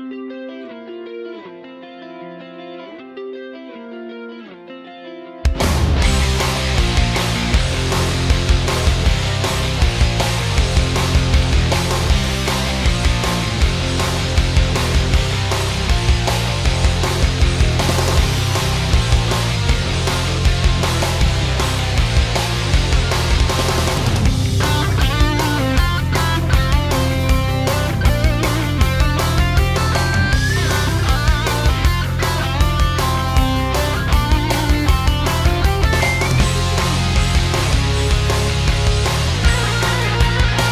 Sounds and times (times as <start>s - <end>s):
Music: 0.0s - 40.7s.